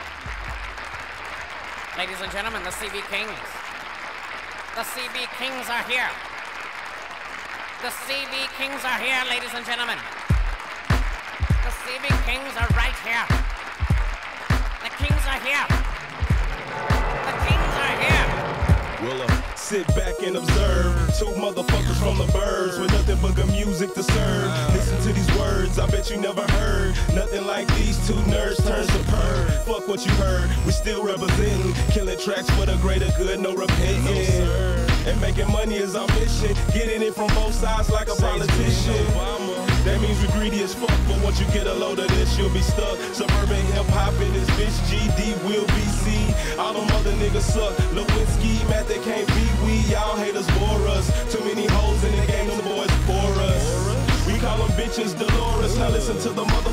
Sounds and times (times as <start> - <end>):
Music: 0.0 - 6.6, 7.2 - 56.7.